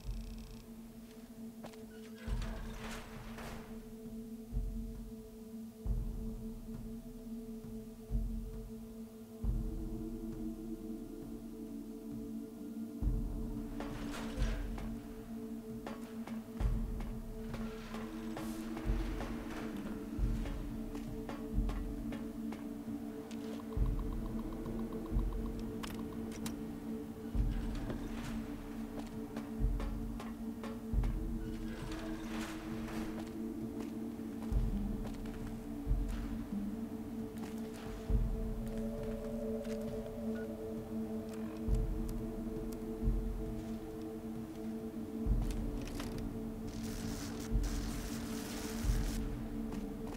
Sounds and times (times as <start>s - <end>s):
Music: 0.0s - 50.1s.